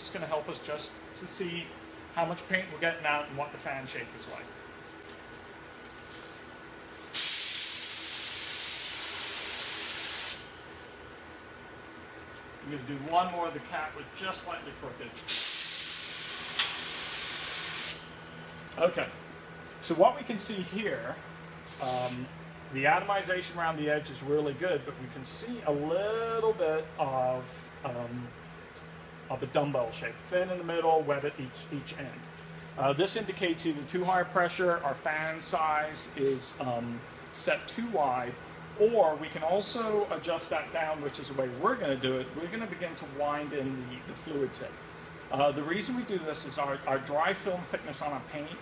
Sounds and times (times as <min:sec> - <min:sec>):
Speech: 0:00.0 - 0:04.5, 0:12.6 - 0:15.3, 0:18.8 - 0:19.2, 0:19.8 - 0:21.2, 0:21.8 - 0:28.3, 0:29.3 - 0:48.6
Spray: 0:07.1 - 0:10.5, 0:15.3 - 0:18.0, 0:21.7 - 0:22.2.